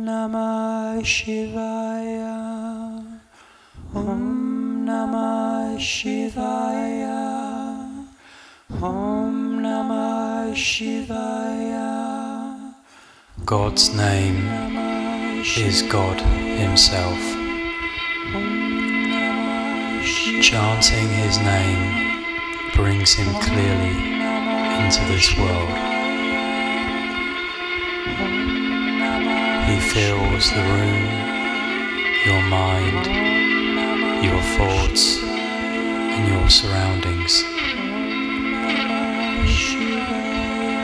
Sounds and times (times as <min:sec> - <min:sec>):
Soul music: 0:04.0 - 0:08.1, 0:08.8 - 0:12.7, 0:13.5 - 0:40.8.